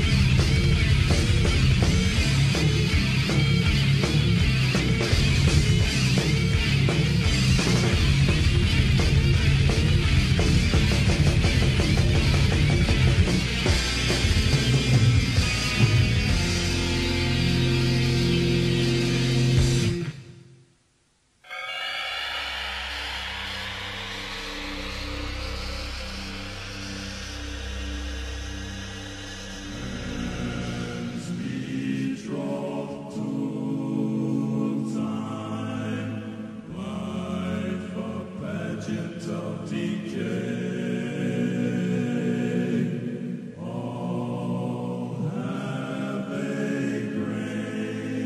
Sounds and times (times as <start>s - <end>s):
Music: 0.0s - 20.8s, 21.5s - 48.2s.